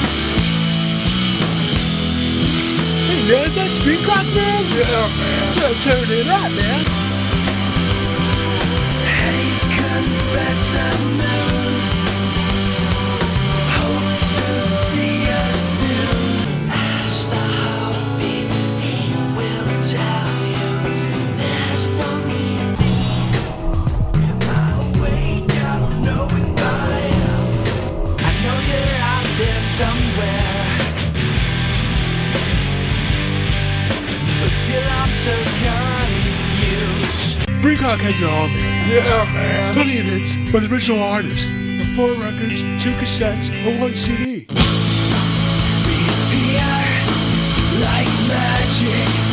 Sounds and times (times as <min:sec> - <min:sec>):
Music: 0:00.0 - 0:49.3
Speech: 0:03.0 - 0:07.0, 0:09.1 - 0:11.8, 0:34.2 - 0:44.5.